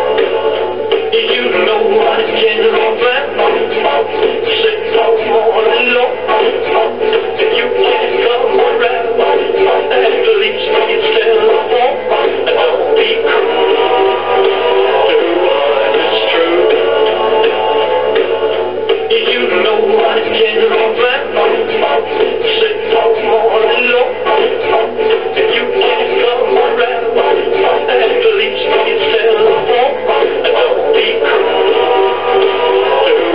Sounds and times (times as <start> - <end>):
Music: 0.0 - 33.3
Synthetic singing: 0.0 - 33.3.